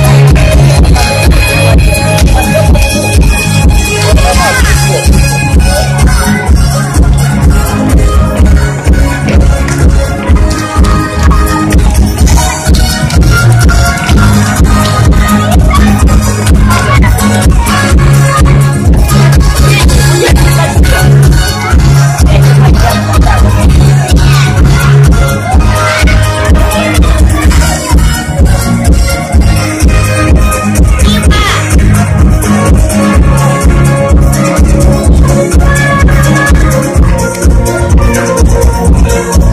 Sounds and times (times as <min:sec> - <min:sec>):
Music: 0:00.0 - 0:39.5
Speech: 0:01.6 - 0:07.0, 0:15.4 - 0:28.1, 0:30.9 - 0:31.8.